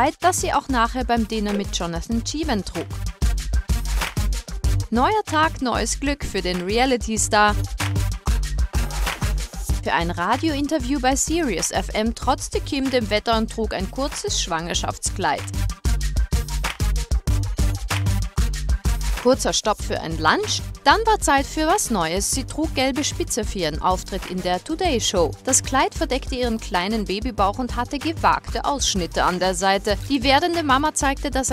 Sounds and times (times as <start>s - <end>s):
Speech: 0.0s - 2.9s, 4.9s - 7.6s, 9.8s - 15.5s, 19.3s - 31.5s
Music: 0.0s - 31.5s.